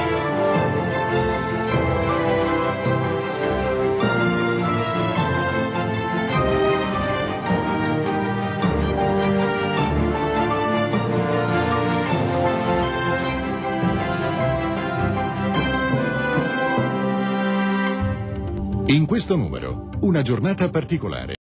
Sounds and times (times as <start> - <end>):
Music: 0.0 - 21.4
Speech: 18.9 - 21.4.